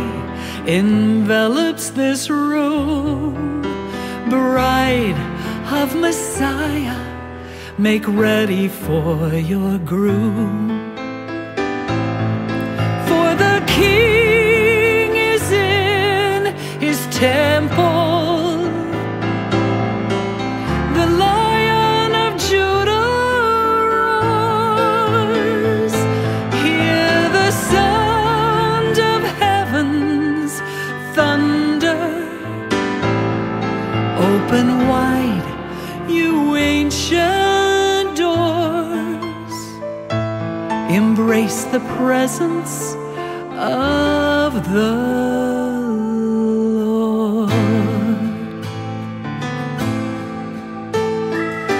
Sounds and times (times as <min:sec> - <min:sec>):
Song: 0:10.6 - 0:39.4, 0:49.4 - 0:51.7.